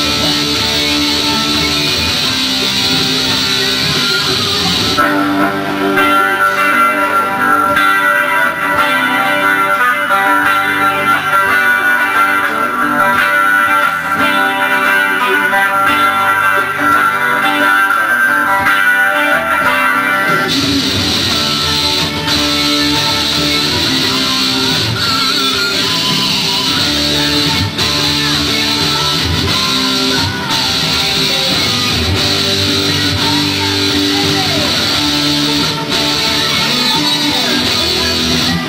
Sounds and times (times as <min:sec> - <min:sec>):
Guitar: 0:00.0 - 0:38.6.